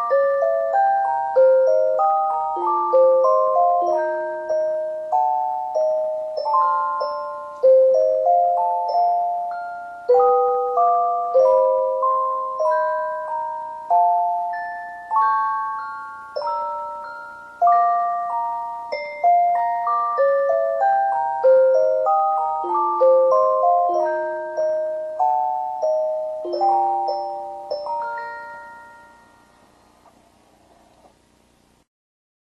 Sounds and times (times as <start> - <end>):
Music: 0.0 - 30.2.